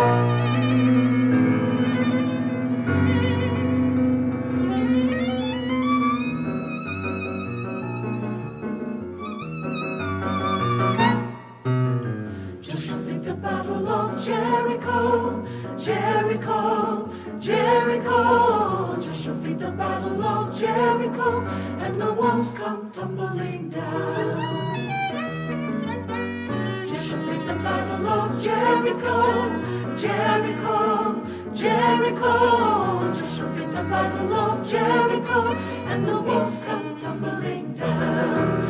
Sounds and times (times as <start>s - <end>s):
Music: 0.0s - 38.6s.